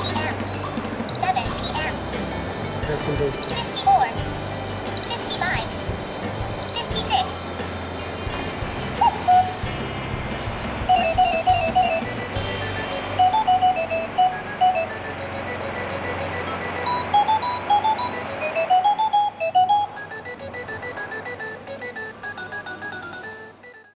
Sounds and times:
Alarm clock: 0:00.0 - 0:02.0, 0:10.9 - 0:23.9
Music: 0:00.0 - 0:23.9.

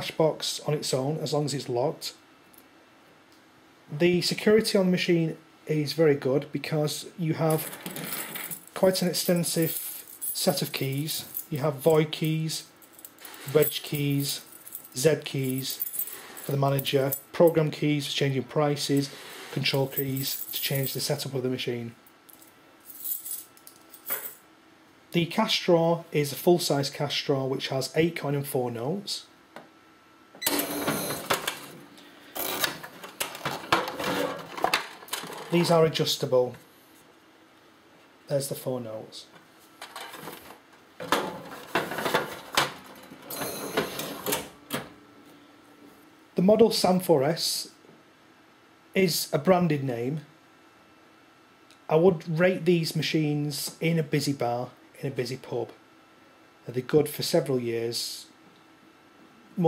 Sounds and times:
Speech: 0:00.0 - 0:02.2, 0:03.9 - 0:07.7, 0:08.8 - 0:09.8, 0:10.4 - 0:12.7, 0:13.5 - 0:15.8, 0:16.5 - 0:22.0, 0:25.1 - 0:29.3, 0:35.5 - 0:36.6, 0:38.3 - 0:39.4, 0:46.4 - 0:47.8, 0:48.9 - 0:50.3, 0:51.9 - 0:55.8, 0:56.6 - 0:58.4
Cash register: 0:30.4 - 0:31.8, 0:32.4 - 0:35.7, 0:41.1 - 0:44.9.

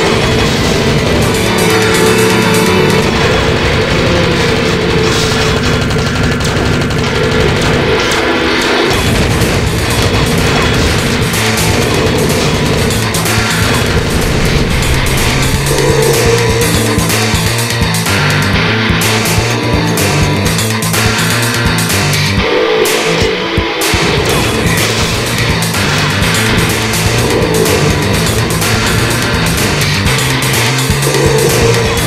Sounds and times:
Angry music: 0:00.0 - 0:32.0.

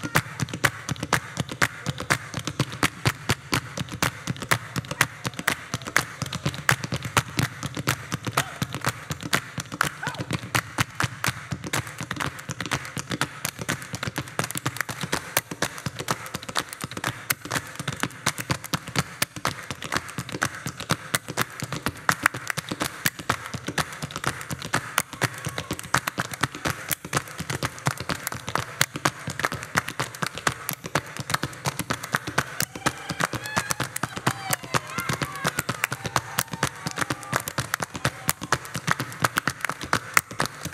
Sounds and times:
Percussion: 0:00.0 - 0:40.7.

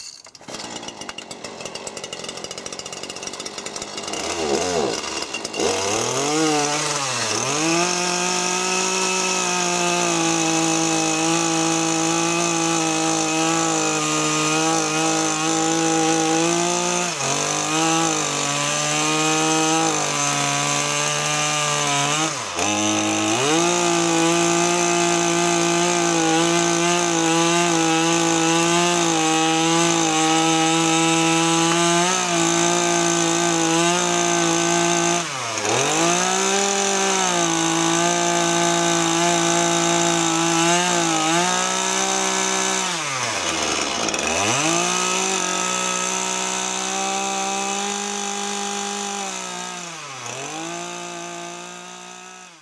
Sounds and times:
Chainsaw: 0:00.0 - 0:52.6.

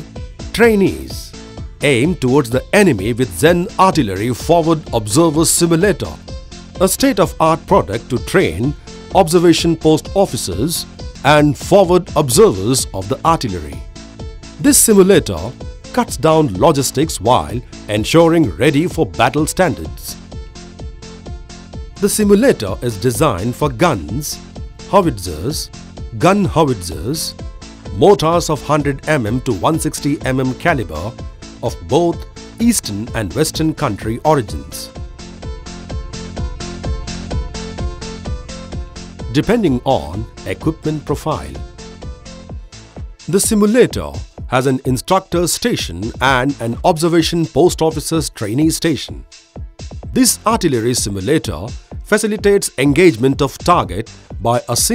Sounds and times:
Music: 0:00.0 - 0:54.9
Speech: 0:00.6 - 0:06.2, 0:06.8 - 0:13.8, 0:14.6 - 0:20.2, 0:22.0 - 0:27.3, 0:28.0 - 0:34.9, 0:39.3 - 0:41.6, 0:43.3 - 0:49.2, 0:50.2 - 0:54.9.

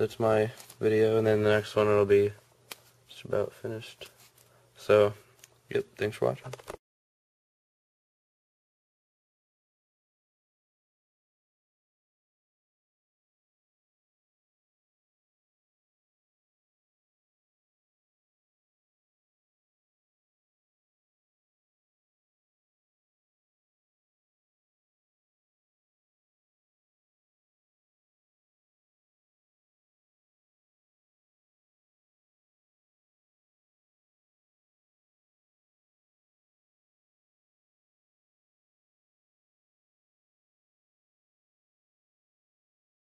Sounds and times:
Speech: 0:00.0 - 0:02.4, 0:03.1 - 0:04.1, 0:04.8 - 0:06.7
Inside, small room: 0:00.0 - 0:06.9.

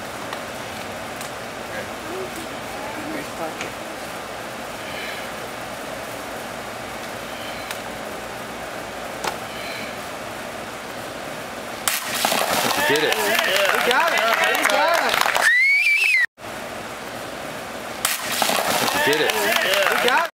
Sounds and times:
Speech: 0:12.8 - 0:15.2, 0:19.0 - 0:20.3.

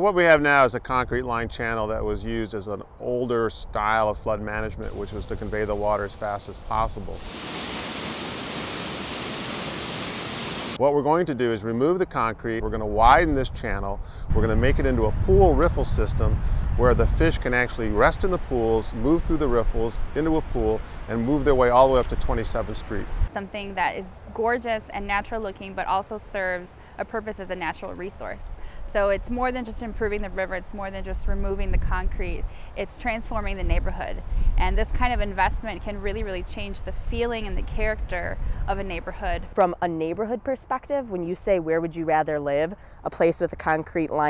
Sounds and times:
Waterfall: 0:04.8 - 0:10.8.

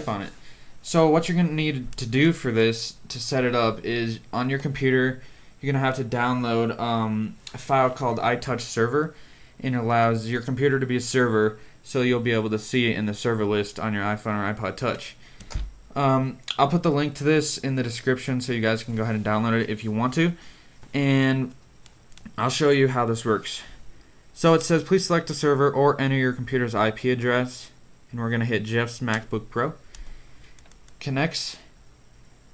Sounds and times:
Speech: 0:00.0 - 0:15.2, 0:15.9 - 0:20.4, 0:21.0 - 0:21.6, 0:22.3 - 0:23.8, 0:24.4 - 0:29.8, 0:31.0 - 0:31.7.

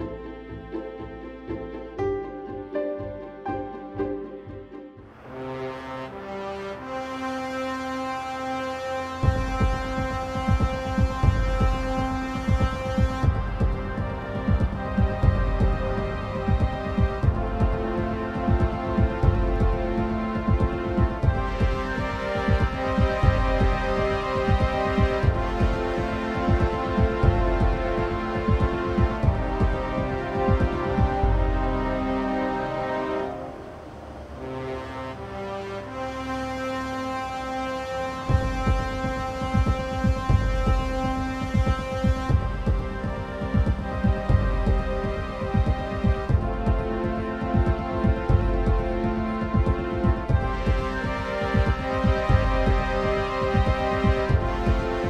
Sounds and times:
Music: 0:00.0 - 0:55.1.

